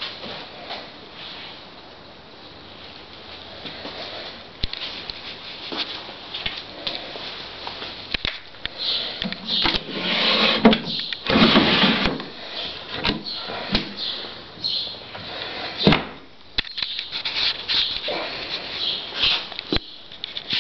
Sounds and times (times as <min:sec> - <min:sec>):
Cupboard open or close: 0:09.3 - 0:14.0, 0:15.6 - 0:16.2
Drawer open or close: 0:09.4 - 0:12.3.